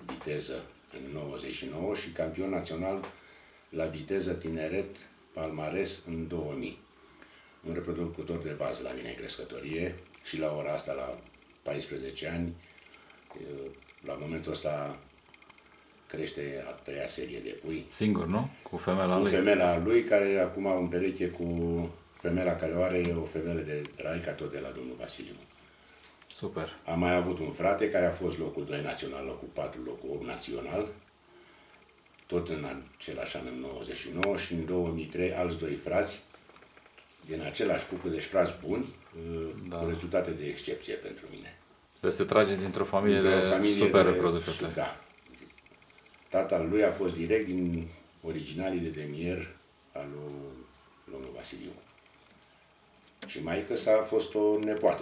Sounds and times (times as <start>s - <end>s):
Speech: 0.0s - 3.1s, 3.8s - 6.8s, 7.7s - 12.6s, 13.4s - 15.0s, 16.1s - 25.5s, 26.3s - 31.0s, 32.3s - 36.3s, 37.3s - 45.0s, 46.4s - 51.8s, 53.2s - 55.0s
Inside, small room: 0.0s - 55.0s.